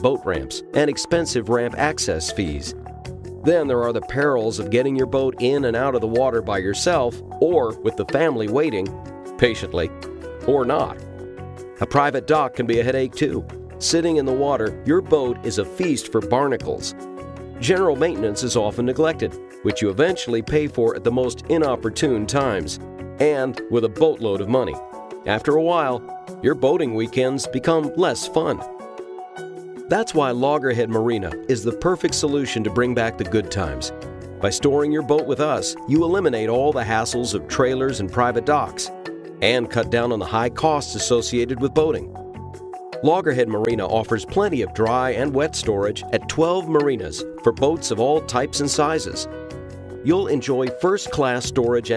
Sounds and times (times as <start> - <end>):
Speech: 0.0 - 2.7, 3.5 - 11.0, 11.8 - 16.9, 17.6 - 28.6, 29.9 - 42.1, 43.0 - 49.3, 50.1 - 51.9
Music: 0.0 - 51.9.